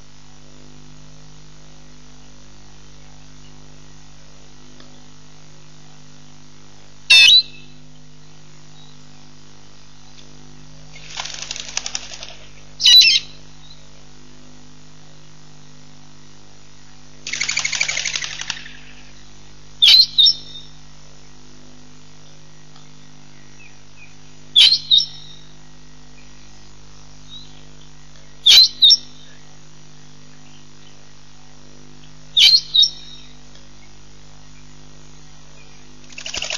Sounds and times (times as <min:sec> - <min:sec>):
Outside, rural or natural: 0:00.0 - 0:36.5
Pigeon, dove: 0:17.3 - 0:19.0, 0:36.1 - 0:36.5.